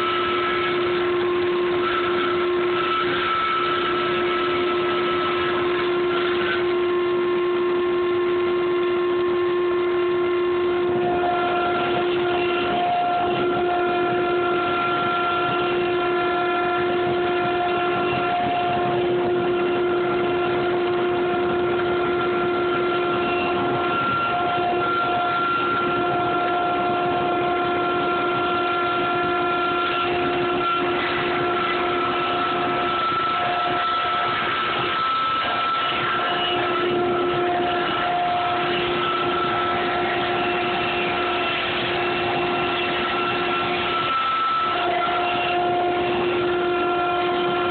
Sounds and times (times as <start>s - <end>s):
Inside, large room or hall: 0.0s - 47.7s.